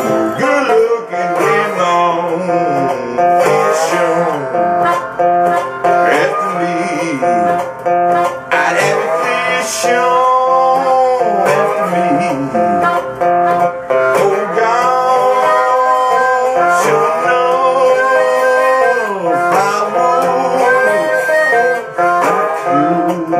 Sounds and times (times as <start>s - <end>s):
Acoustic guitar: 0.0s - 23.3s.